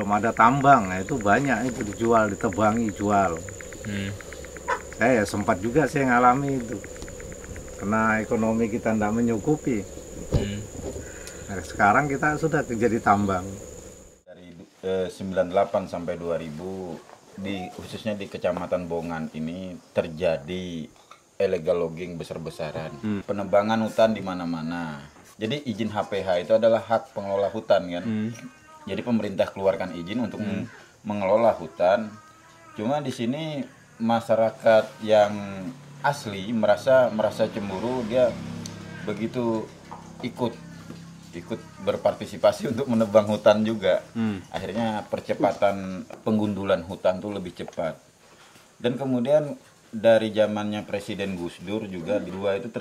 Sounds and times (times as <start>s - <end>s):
Speech: 0.0s - 4.2s, 5.0s - 6.8s, 7.8s - 9.8s, 14.3s - 38.4s, 39.0s - 40.6s, 41.3s - 48.0s, 48.8s - 52.8s
Outside, rural or natural: 0.0s - 14.3s.